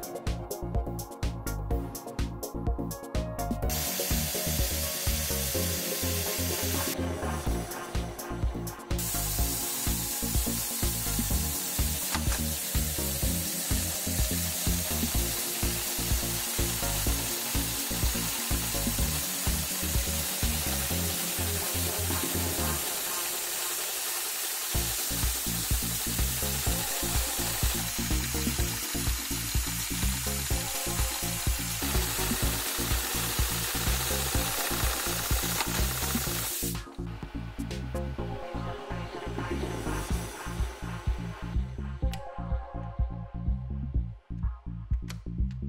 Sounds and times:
Sewing machine: 3.7 - 7.0, 9.0 - 36.8
Sizzle: 3.7 - 7.0, 9.0 - 36.9.

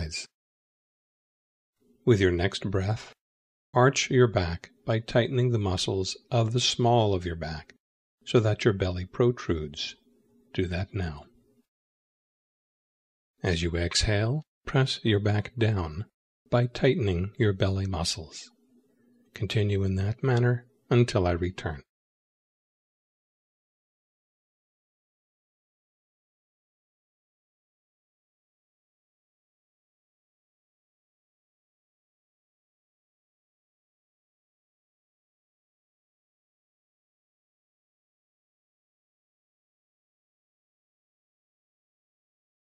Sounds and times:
Speech: 0.0 - 0.4, 2.0 - 3.2, 3.8 - 11.4, 13.4 - 18.6, 19.4 - 22.0.

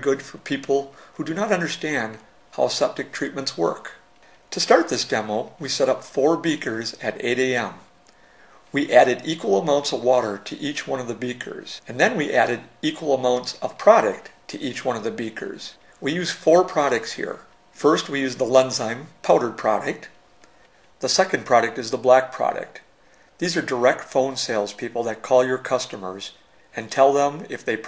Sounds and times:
Speech: 0.0 - 7.9, 8.7 - 20.2, 21.0 - 27.8.

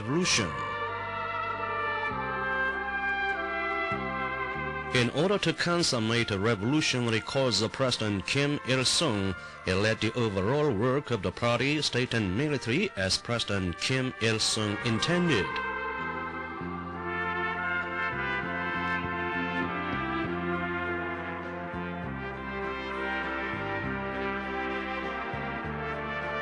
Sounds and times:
Speech: 0.0 - 0.6, 5.0 - 15.6
Classical music: 0.0 - 9.2, 13.6 - 26.4.

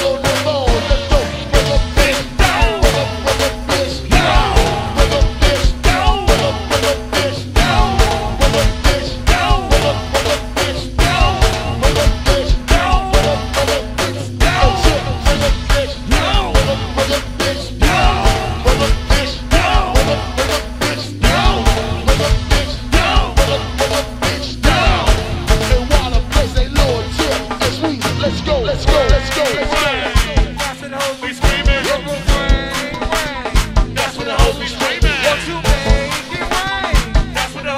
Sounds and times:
Music: 0.0 - 37.7.

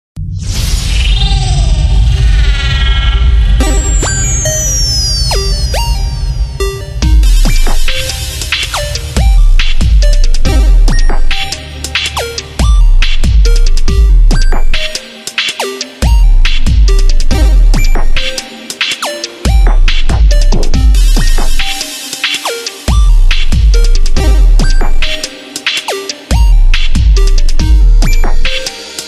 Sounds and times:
Dubstep: 0.2 - 29.0.

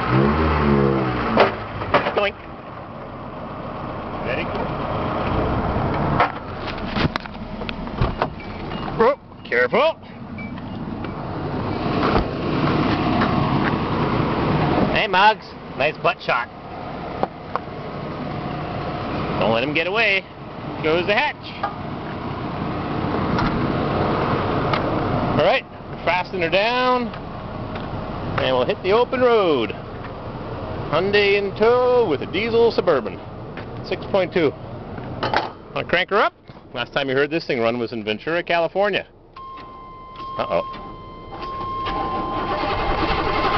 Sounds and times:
Vehicle: 0.0 - 43.5
Speech: 4.2 - 4.6, 9.0 - 10.1, 14.9 - 16.5, 19.4 - 21.6, 25.4 - 27.2, 28.4 - 29.8, 30.9 - 33.2, 33.8 - 34.6, 35.8 - 39.1, 40.4 - 40.7.

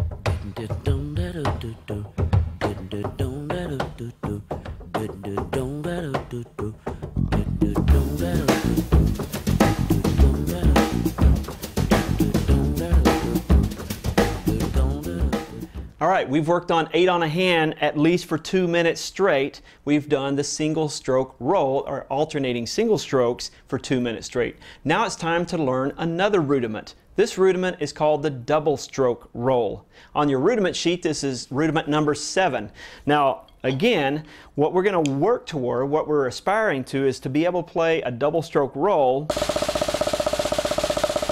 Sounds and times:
Speech: 16.0 - 39.3.

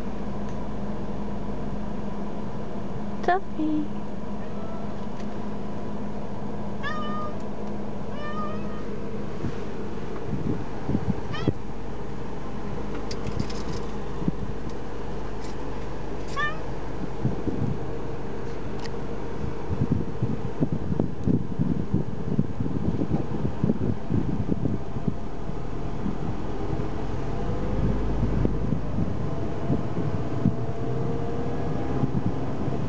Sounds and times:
Cat: 6.8 - 7.4, 8.1 - 8.9, 11.3 - 11.6, 16.3 - 16.6.

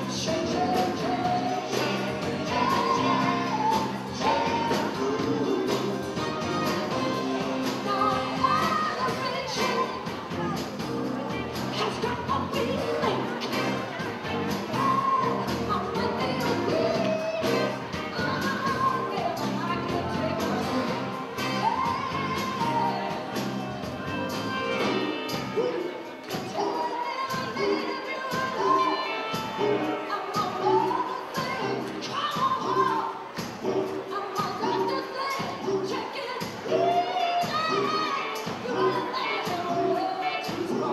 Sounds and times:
Inside, large room or hall: 0.0 - 40.9
Music: 0.0 - 40.9
Singing: 0.0 - 40.9.

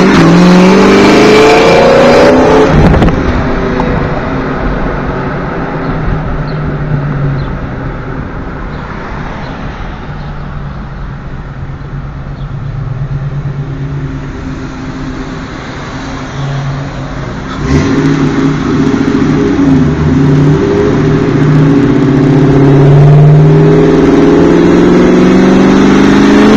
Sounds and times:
Outside, urban or manmade: 0.0 - 26.5
Race car, auto racing: 0.0 - 26.5.

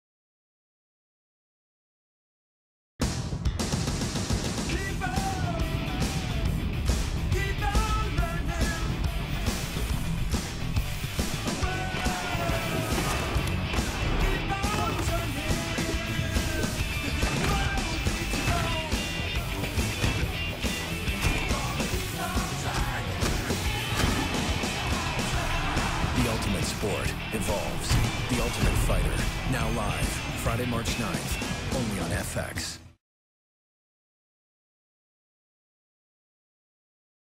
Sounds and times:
Music: 3.0 - 33.0
Speech: 26.1 - 32.9.

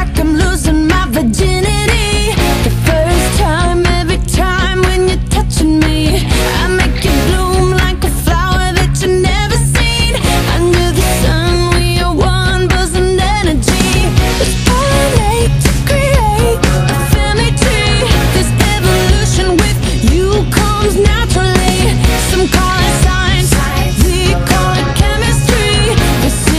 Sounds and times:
Music: 0.0 - 26.5.

